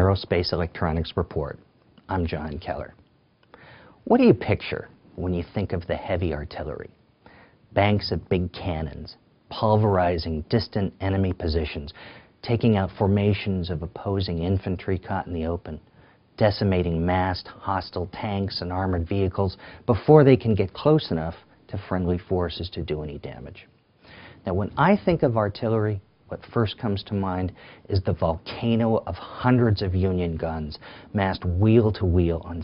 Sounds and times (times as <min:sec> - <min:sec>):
Speech: 0:00.0 - 0:03.0, 0:04.0 - 0:07.0, 0:07.7 - 0:23.7, 0:24.4 - 0:32.6
Inside, small room: 0:00.0 - 0:32.6.